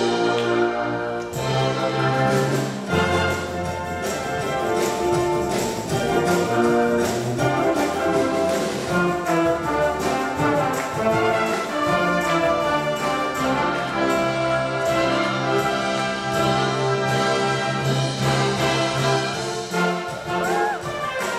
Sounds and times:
Orchestra: 0.0 - 21.3.

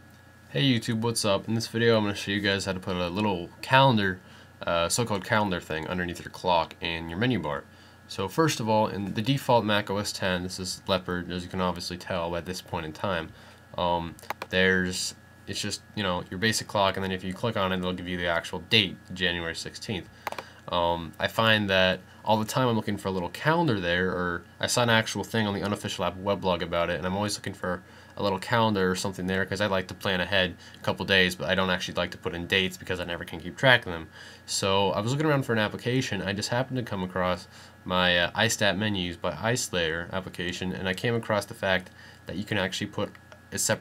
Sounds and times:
Speech: 0.5 - 20.1, 20.7 - 43.8.

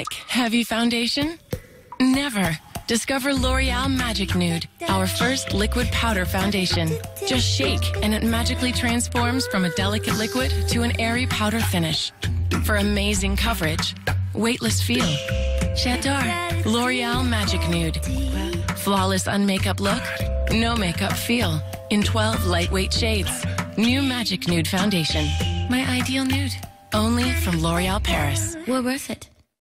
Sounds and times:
Speech: 0.0 - 1.4, 2.0 - 15.2, 15.8 - 29.3
Music: 1.5 - 28.7.

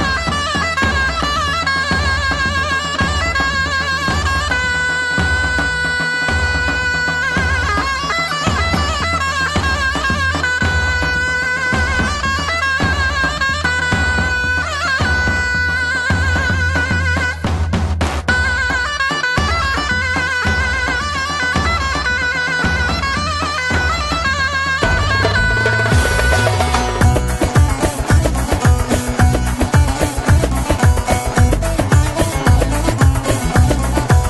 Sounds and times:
Folk music: 0.0 - 34.3.

